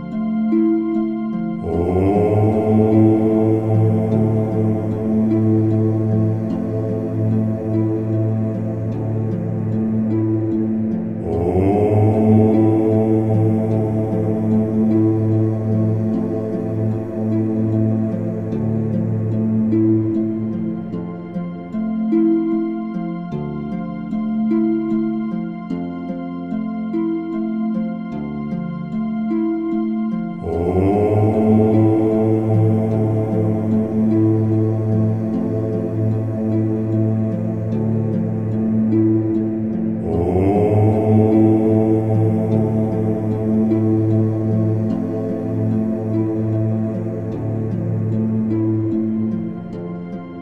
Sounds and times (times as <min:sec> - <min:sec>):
Ambient music: 0:00.0 - 0:50.4
Mantra: 0:01.6 - 0:09.6, 0:11.1 - 0:18.5, 0:30.4 - 0:38.5, 0:39.8 - 0:48.0.